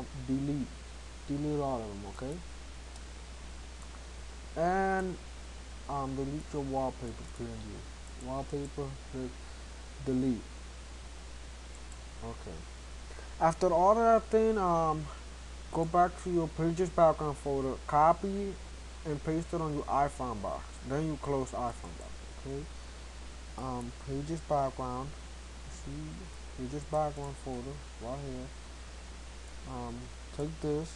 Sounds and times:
Speech: 0.0 - 2.5, 4.6 - 5.2, 5.9 - 9.4, 10.0 - 10.5, 12.2 - 12.7, 13.4 - 22.7, 23.6 - 28.5, 29.7 - 30.9.

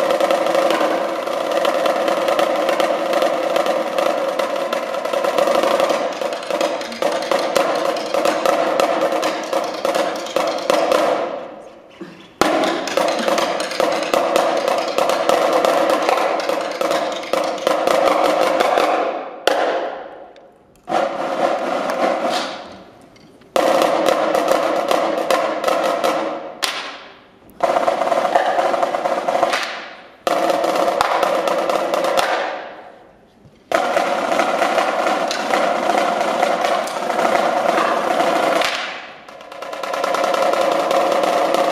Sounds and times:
Drum: 0.0 - 11.6, 12.4 - 20.1, 20.9 - 32.8, 33.7 - 41.7.

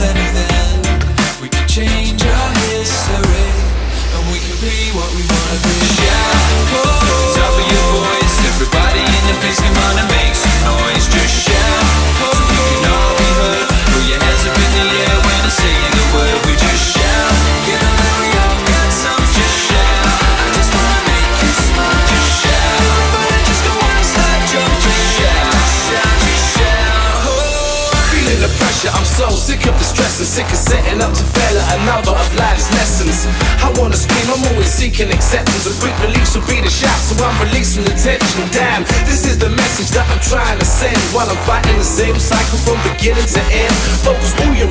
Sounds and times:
Music: 0.0 - 44.7.

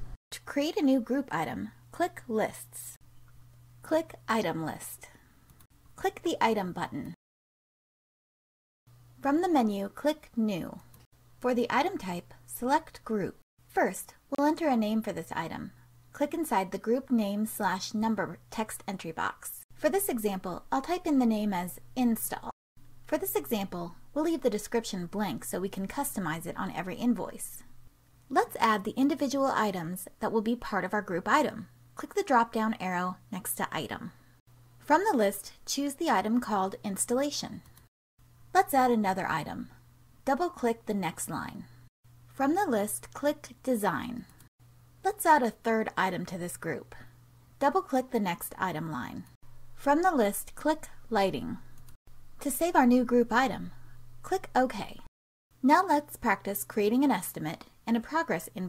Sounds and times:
Narration, monologue: 0.0 - 7.2, 8.9 - 58.6.

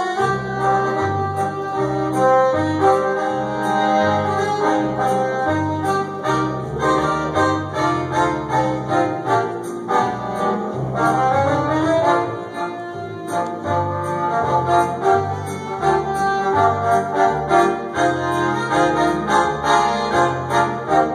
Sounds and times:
Accordion: 0.0 - 21.1
Inside, large room or hall: 0.0 - 21.1.

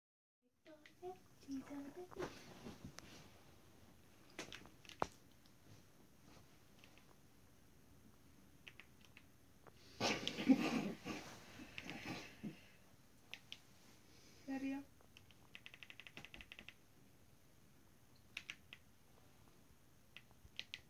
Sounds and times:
Speech: 0.6 - 2.4, 14.5 - 14.9.

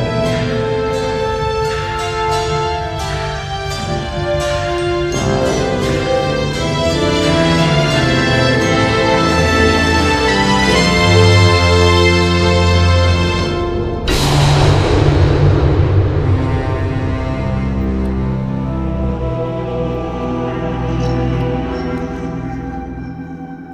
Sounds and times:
Soundtrack music: 0.0 - 23.7.

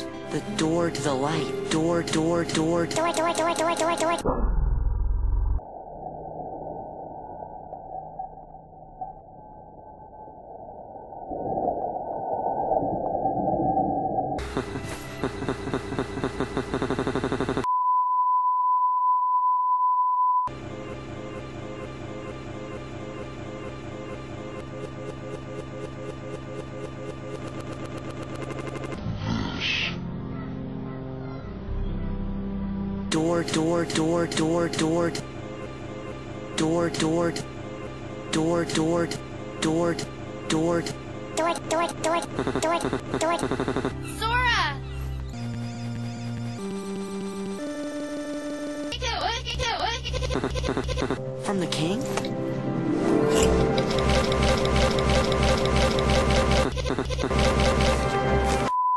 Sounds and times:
Music: 0.0 - 4.2, 14.4 - 16.8, 20.5 - 26.4, 29.0 - 50.0, 50.9 - 58.7
Speech: 0.3 - 4.2, 33.1 - 35.2, 44.2 - 44.8, 49.0 - 50.0, 51.4 - 52.2.

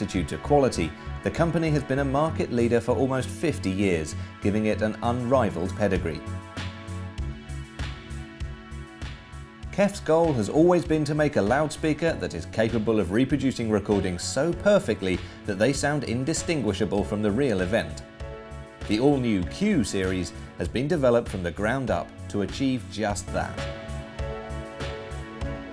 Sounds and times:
Speech: 0.0 - 6.2, 9.7 - 18.0, 18.8 - 23.7
Music: 0.0 - 25.7.

